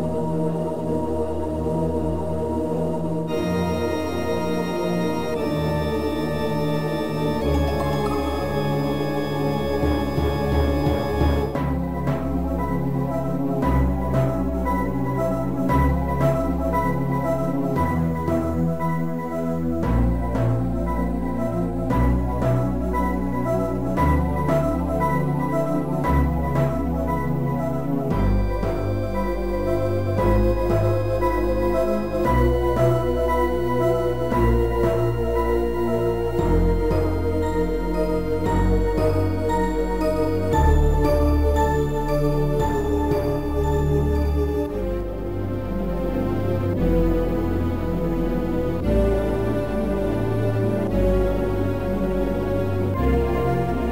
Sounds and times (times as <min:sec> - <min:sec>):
Video game music: 0:00.0 - 0:53.9.